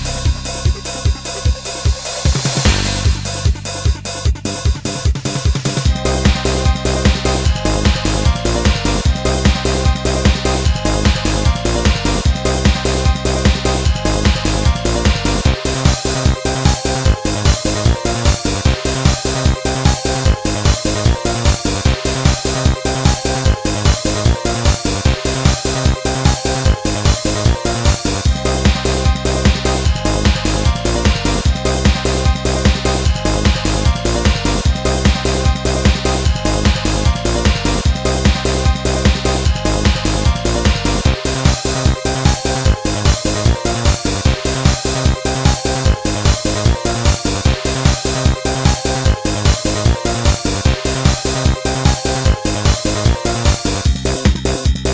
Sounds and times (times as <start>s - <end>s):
Techno: 0.0s - 54.9s.